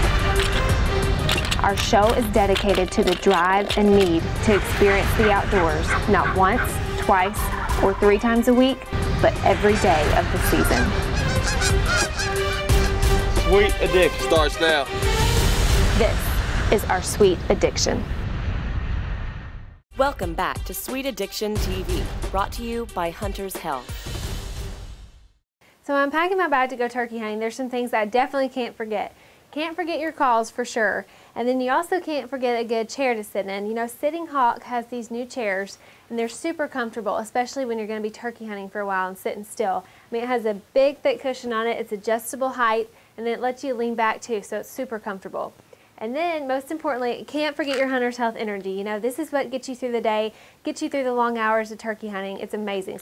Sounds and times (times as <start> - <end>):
Music: 0.0 - 17.7, 19.9 - 25.4
Speech: 1.6 - 10.9, 13.5 - 14.9, 16.0 - 18.1, 20.0 - 23.9, 25.9 - 53.0
Bird: 10.6 - 13.0.